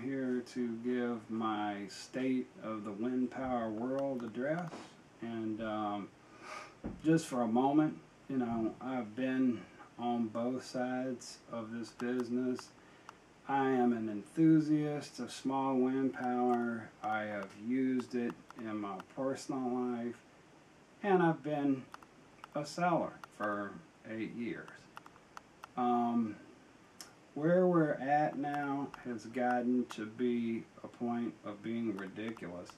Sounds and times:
Speech: 0.0s - 6.1s, 7.0s - 12.7s, 13.5s - 20.2s, 21.0s - 21.9s, 22.5s - 24.9s, 25.8s - 26.4s, 27.4s - 32.7s.

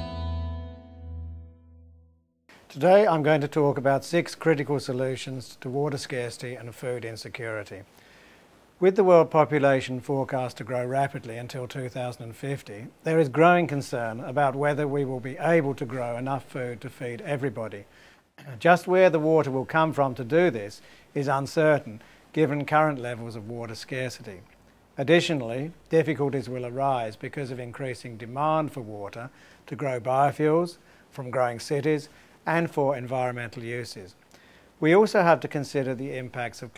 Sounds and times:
Speech: 2.7s - 7.9s, 8.8s - 34.2s, 34.8s - 36.7s.

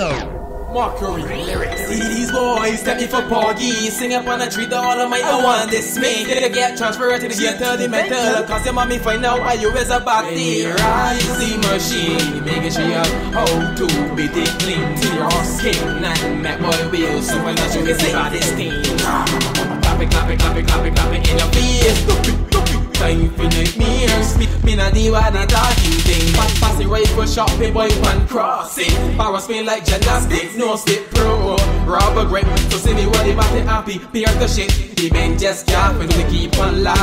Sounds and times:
Happy music: 0.0s - 37.0s.

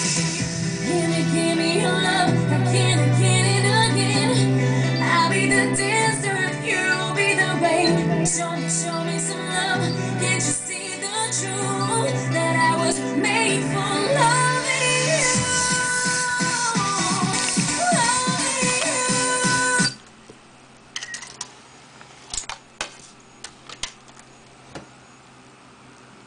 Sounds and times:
Music: 0.0s - 20.0s.

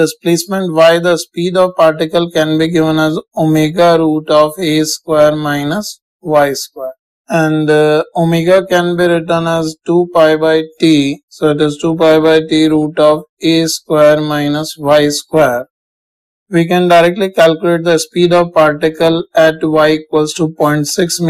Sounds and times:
Speech: 0.0s - 15.7s, 16.5s - 21.2s.

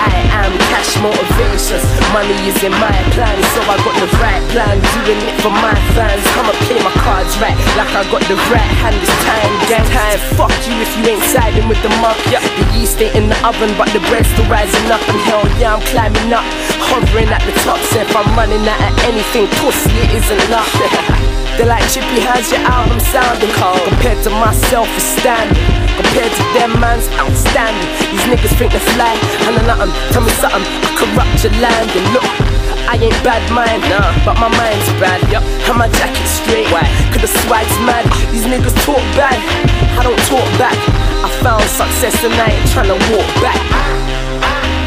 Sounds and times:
Music: 0.0s - 44.8s.

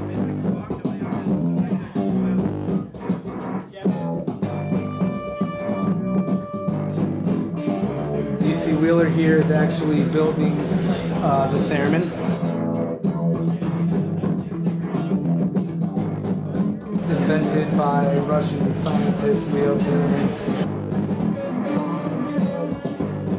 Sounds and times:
Speech: 0.0s - 2.8s, 3.7s - 4.1s, 8.4s - 12.3s, 13.6s - 14.6s, 16.5s - 20.4s
Music: 0.0s - 23.3s.

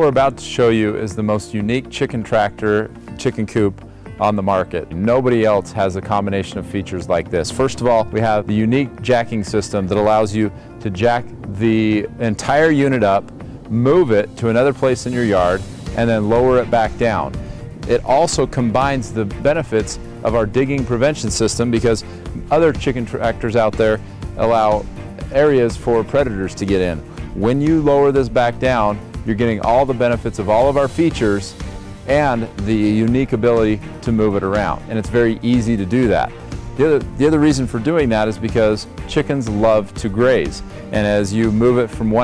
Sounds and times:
Music: 0.0s - 42.2s
Speech: 0.0s - 42.2s.

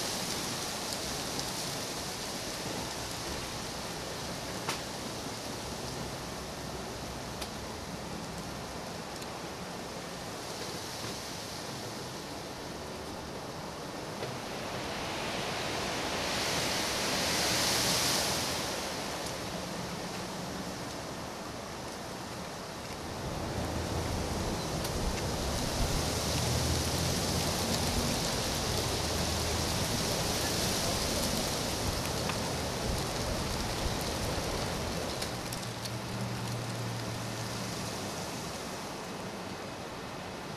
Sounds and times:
Wind: 0.0s - 40.5s.

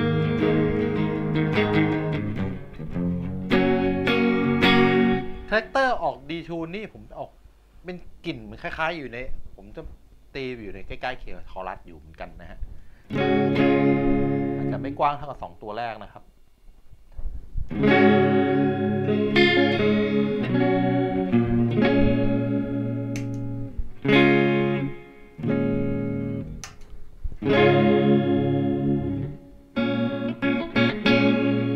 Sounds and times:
Guitar: 0.0s - 6.2s, 12.6s - 15.4s, 17.1s - 31.7s.

